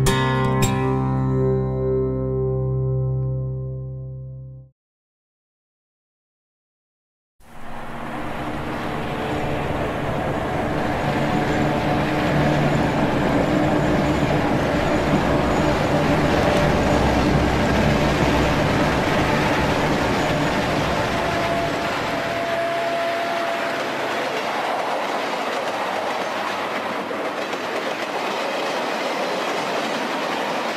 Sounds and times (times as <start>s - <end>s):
Train: 0.0s - 1.4s, 7.4s - 30.7s
Railroad car, train wagon: 7.4s - 30.7s.